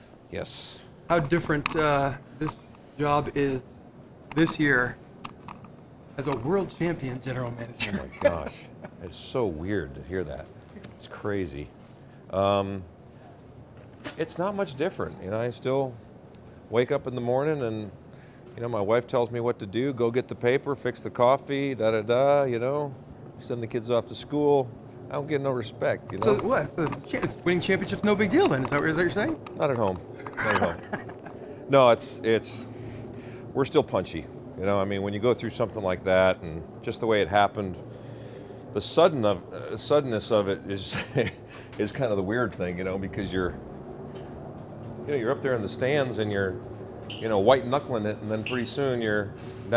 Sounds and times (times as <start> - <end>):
Speech: 6.2 - 11.7, 18.6 - 30.8, 33.6 - 37.8, 38.8 - 41.1, 41.8 - 43.6, 45.1 - 49.7.